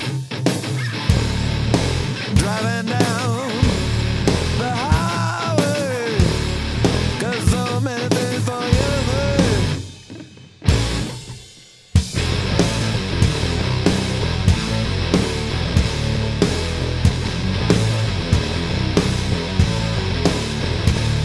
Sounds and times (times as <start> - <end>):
Guitar: 0.0 - 21.2.